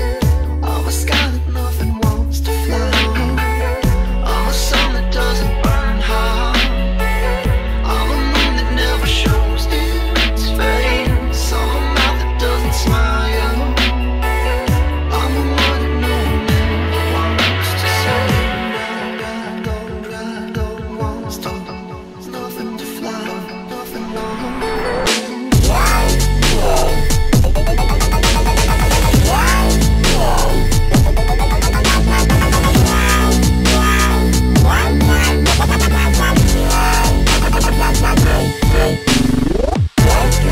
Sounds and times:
Dubstep: 0.0 - 40.5.

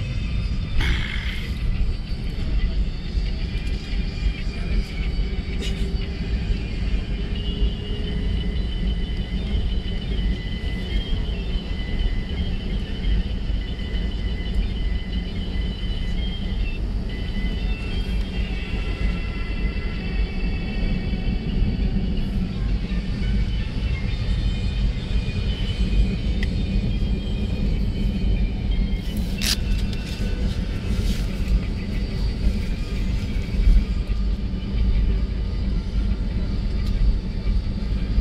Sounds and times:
Fixed-wing aircraft, airplane: 0.0 - 38.2.

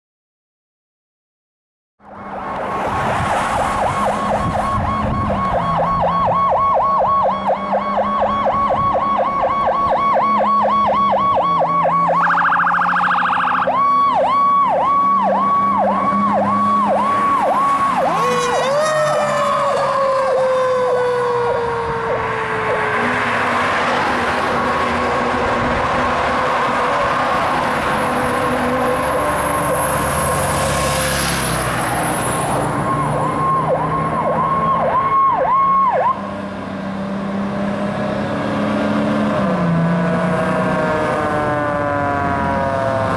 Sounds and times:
Engine: 2.0 - 43.1
Truck: 2.0 - 43.1
Siren: 2.1 - 43.1.

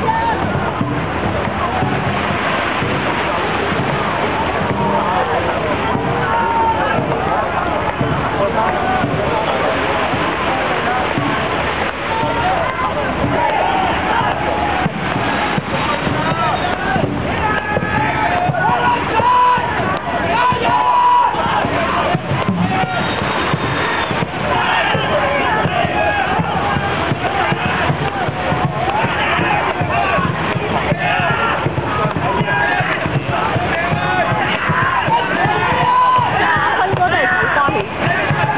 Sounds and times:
Speech: 0.0 - 23.1, 24.1 - 38.5.

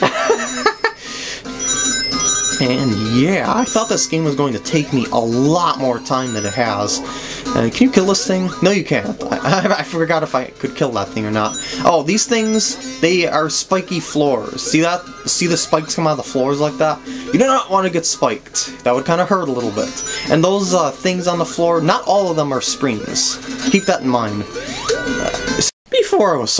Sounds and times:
Music: 0.0 - 25.7
Speech: 2.6 - 24.4, 25.9 - 26.5.

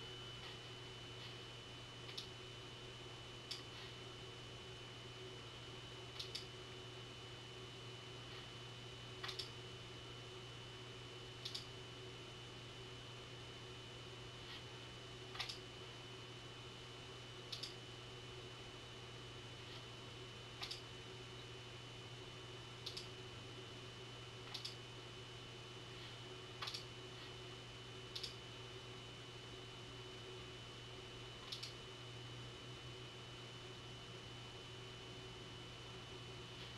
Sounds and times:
Inside, small room: 0.0 - 36.7.

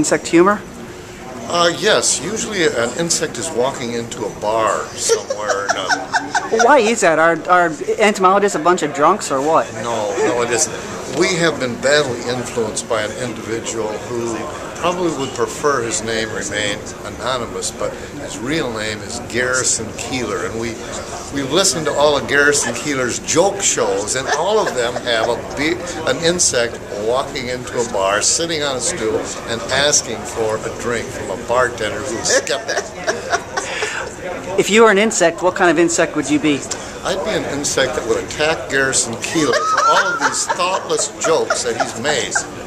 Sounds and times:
Speech: 1.4 - 42.5.

